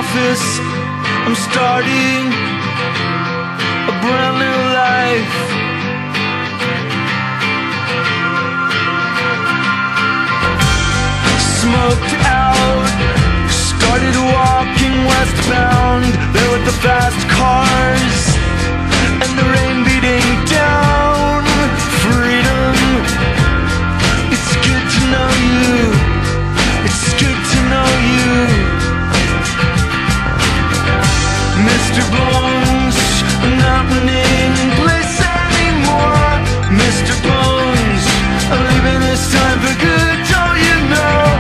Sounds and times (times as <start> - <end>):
Music: 0.0 - 41.4.